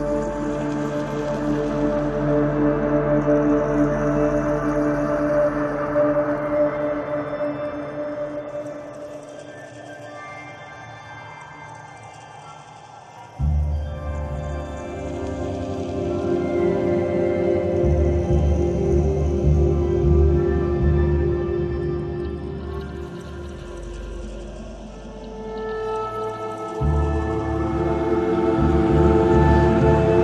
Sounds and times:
Ambient music: 0:00.0 - 0:30.2
Soundtrack music: 0:13.4 - 0:30.2.

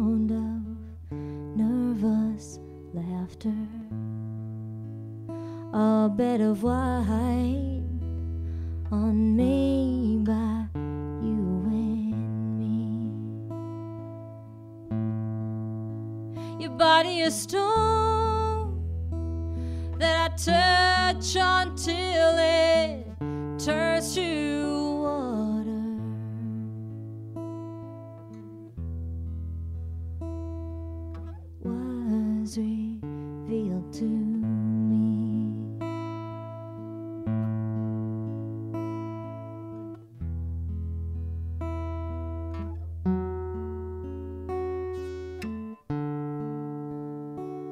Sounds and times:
Acoustic guitar: 0:00.0 - 0:47.7.

